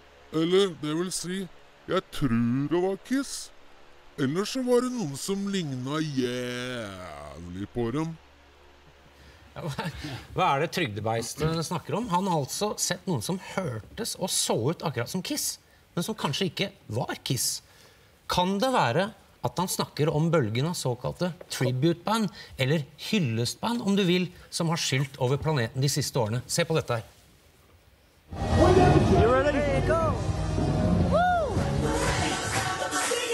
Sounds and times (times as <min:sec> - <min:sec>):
Speech: 0:00.4 - 0:03.5, 0:04.2 - 0:08.2, 0:09.6 - 0:17.6, 0:18.3 - 0:27.1.